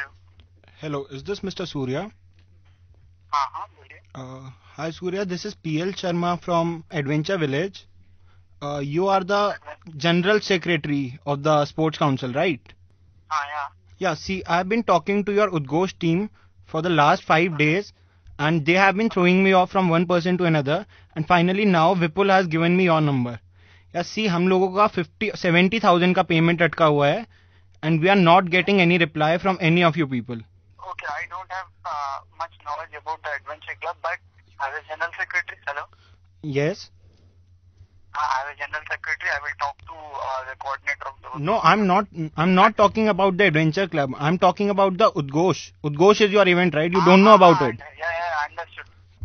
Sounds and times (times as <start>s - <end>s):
Speech: 0.8s - 2.2s, 8.6s - 23.4s, 24.0s - 36.9s, 38.2s - 48.9s
Radio: 30.8s - 36.0s, 38.2s - 42.0s, 46.9s - 48.9s.